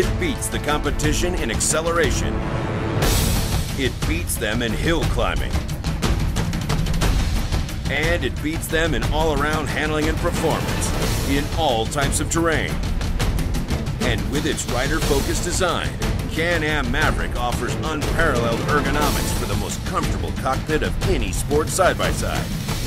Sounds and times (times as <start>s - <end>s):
Speech: 0.0s - 2.4s, 3.8s - 5.6s, 7.9s - 12.8s, 14.0s - 22.5s
Music: 0.0s - 22.8s.